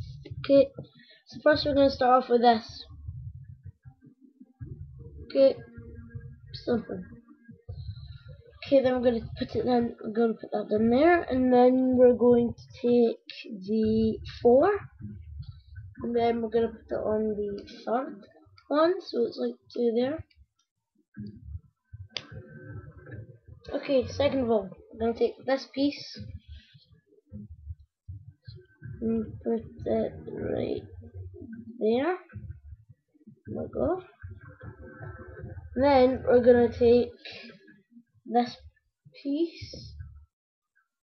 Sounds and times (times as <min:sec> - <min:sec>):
Speech: 0:00.0 - 0:02.9, 0:05.3 - 0:07.2, 0:08.1 - 0:15.1, 0:16.0 - 0:20.2, 0:22.2 - 0:26.4, 0:28.9 - 0:31.0, 0:31.7 - 0:32.4, 0:33.5 - 0:37.6, 0:38.3 - 0:38.6, 0:39.2 - 0:40.0.